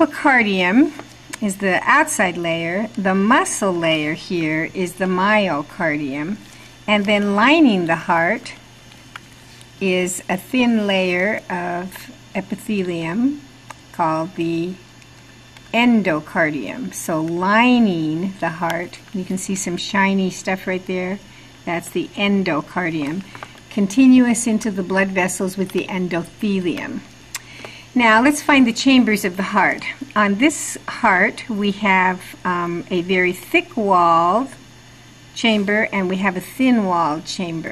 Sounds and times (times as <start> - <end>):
Speech: 0.0 - 8.6, 9.8 - 14.9, 15.7 - 27.1, 27.9 - 34.6, 35.4 - 37.7.